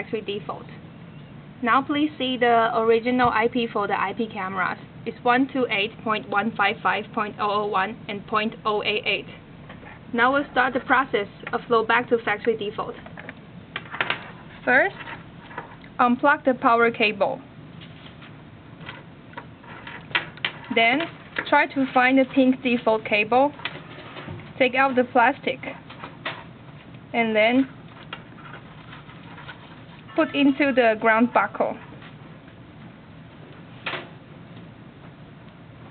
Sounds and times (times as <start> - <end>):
Speech: 0.0 - 0.8, 1.6 - 9.4, 10.1 - 13.1, 14.6 - 15.0, 16.0 - 17.5, 20.7 - 23.6, 24.6 - 25.8, 27.1 - 27.7, 30.2 - 31.9.